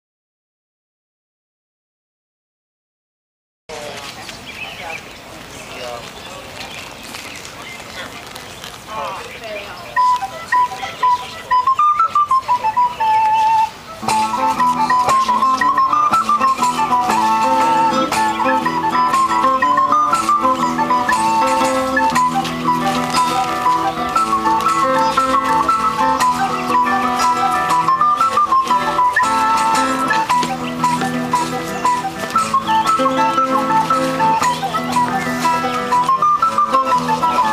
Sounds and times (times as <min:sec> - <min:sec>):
Speech: 0:03.7 - 0:13.3
Outside, rural or natural: 0:03.7 - 0:37.5
Music: 0:10.0 - 0:37.5.